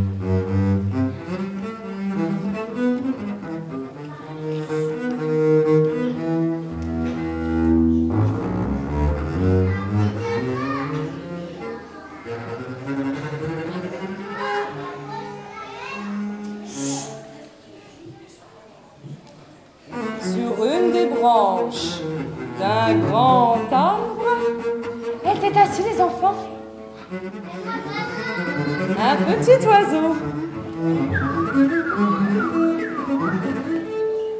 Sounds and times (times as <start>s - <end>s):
Music: 0.0s - 11.5s, 12.3s - 15.4s, 19.9s - 34.3s.